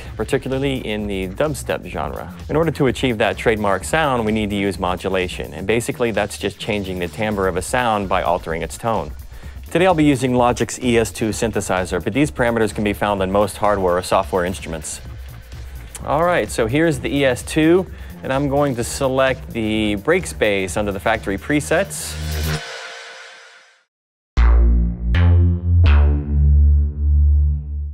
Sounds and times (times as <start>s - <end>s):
Music: 0.0s - 27.9s
Speech: 0.2s - 9.1s, 9.7s - 15.0s, 16.0s - 22.2s.